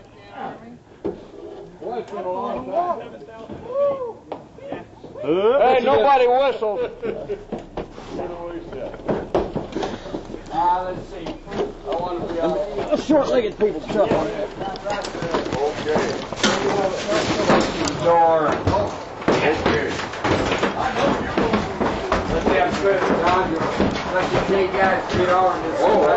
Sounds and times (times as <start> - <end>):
Speech: 10.0 - 20.0, 20.7 - 26.1.